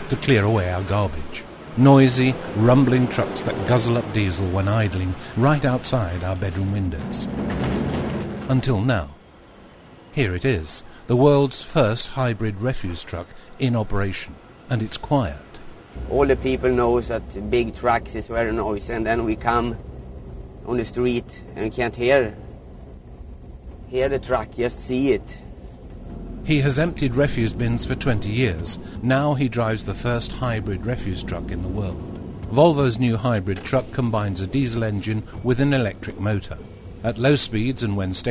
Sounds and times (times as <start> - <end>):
Speech: 0.0 - 7.3, 8.5 - 9.2, 10.2 - 19.8, 20.7 - 22.4, 23.9 - 25.4, 26.5 - 38.3
Vehicle: 0.0 - 38.3.